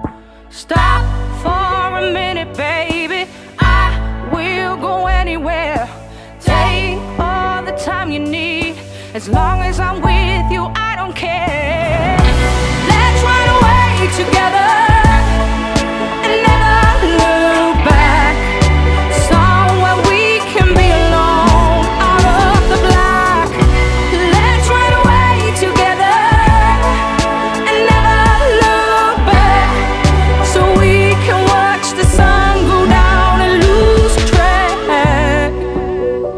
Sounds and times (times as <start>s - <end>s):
Music: 0.0s - 36.3s.